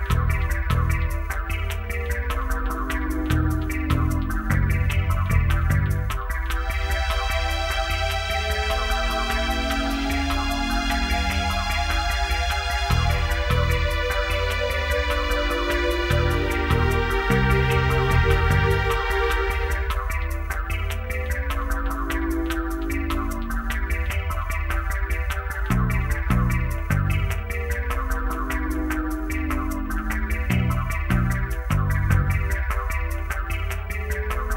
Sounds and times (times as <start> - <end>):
Music: 0.0 - 34.5.